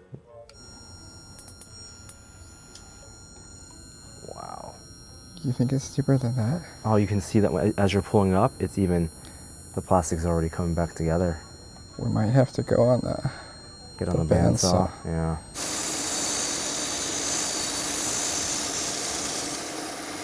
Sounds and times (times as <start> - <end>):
Speech: 14.0 - 15.4.